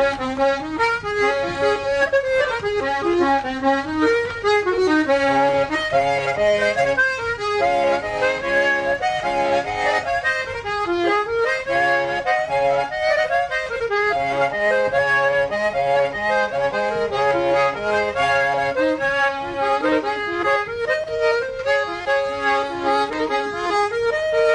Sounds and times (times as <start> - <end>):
Accordion: 0.0 - 24.5
Traditional music: 0.0 - 24.5.